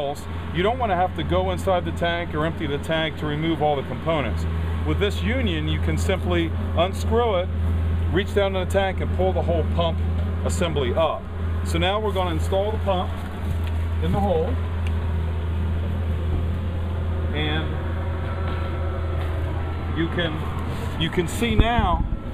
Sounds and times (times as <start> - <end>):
Speech: 0.0 - 7.5, 8.1 - 13.1, 14.0 - 14.6, 17.3 - 17.8, 20.0 - 20.4, 21.0 - 22.1.